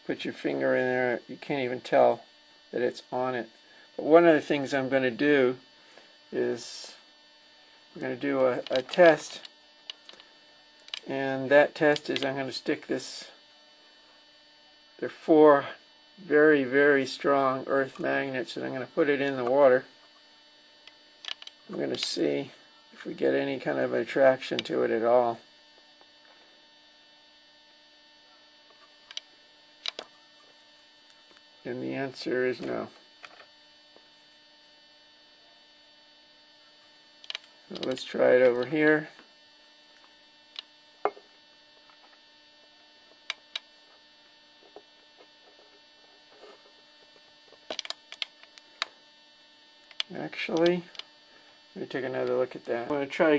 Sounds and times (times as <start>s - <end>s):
Speech: 0.0s - 5.6s, 6.3s - 7.0s, 8.0s - 9.5s, 11.1s - 13.4s, 15.0s - 19.9s, 21.7s - 25.4s, 31.6s - 33.0s, 37.7s - 39.2s, 50.1s - 51.0s, 51.8s - 53.3s.